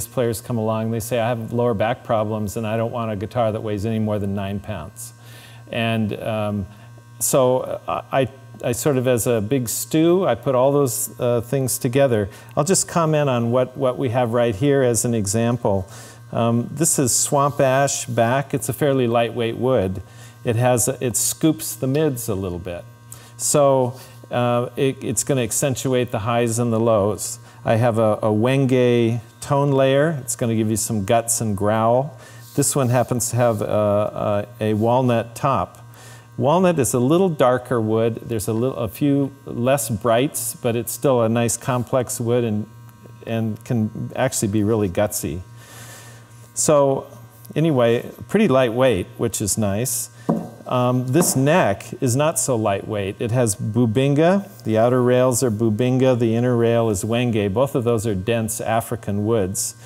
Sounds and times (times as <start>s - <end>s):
Speech: 0.0s - 35.8s, 36.4s - 45.5s, 46.6s - 59.8s.